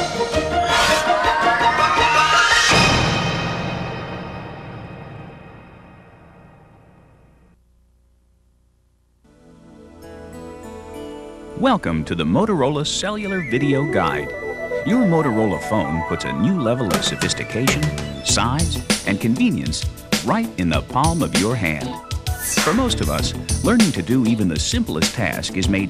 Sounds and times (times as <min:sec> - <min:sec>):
Music: 0:00.0 - 0:07.6, 0:09.2 - 0:25.9
Speech: 0:11.6 - 0:14.3, 0:14.9 - 0:22.0, 0:22.6 - 0:25.9.